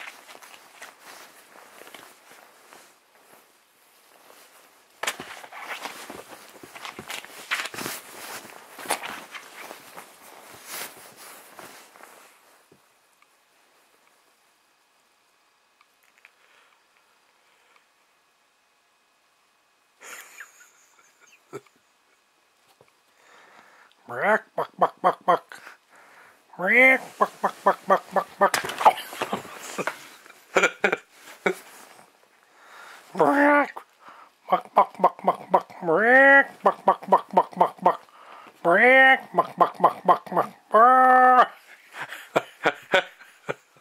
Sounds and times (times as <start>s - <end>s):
Speech: 24.1s - 25.6s, 26.6s - 29.0s, 33.2s - 33.8s, 34.5s - 38.0s, 38.6s - 41.6s.